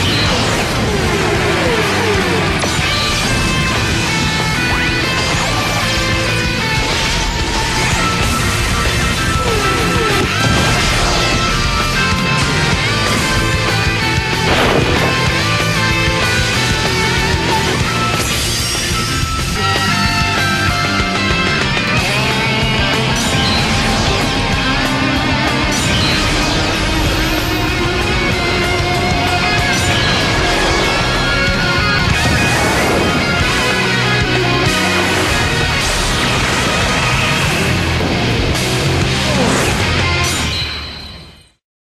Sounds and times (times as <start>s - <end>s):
Background music: 0.0s - 41.0s.